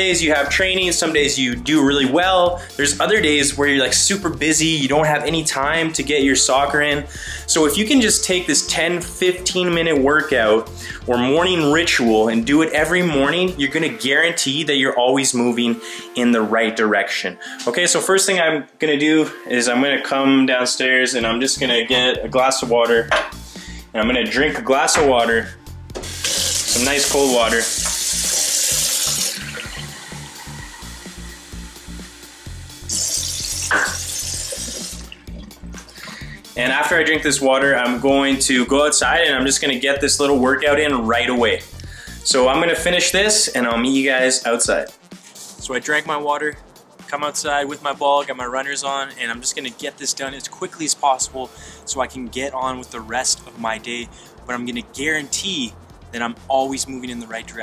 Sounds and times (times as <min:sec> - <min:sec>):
Speech: 0:00.0 - 0:23.1, 0:23.9 - 0:25.6, 0:26.7 - 0:27.8, 0:36.6 - 0:45.0, 0:45.6 - 0:57.6
Inside, small room: 0:00.0 - 0:57.6
Music: 0:00.0 - 0:57.6.